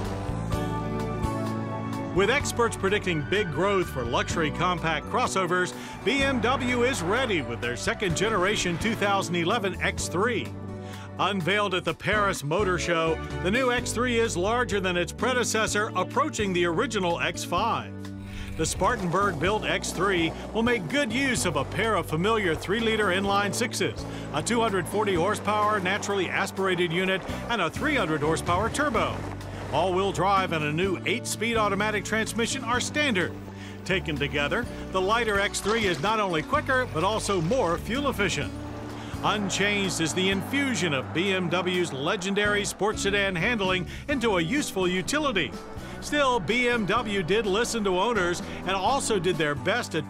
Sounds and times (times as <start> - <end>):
Music: 0.0 - 50.1
Speech: 2.2 - 10.5, 11.2 - 17.9, 18.5 - 38.5, 39.2 - 50.1.